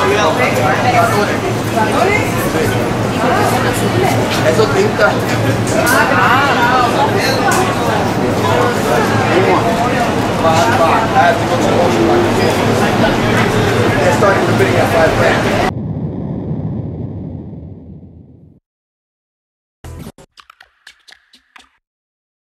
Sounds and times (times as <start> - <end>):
Speech: 0.0 - 15.7.